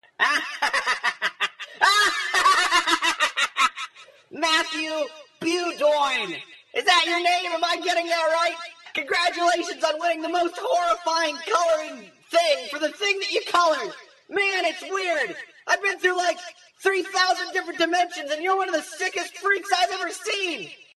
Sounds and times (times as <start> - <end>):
Narration, monologue: 0.0 - 20.9
Male speech, man speaking: 4.3 - 20.9.